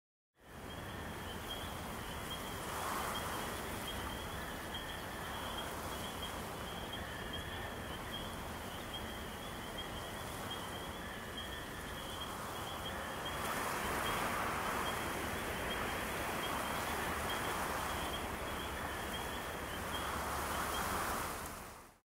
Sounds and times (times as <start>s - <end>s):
Rustling leaves: 0.4s - 22.0s.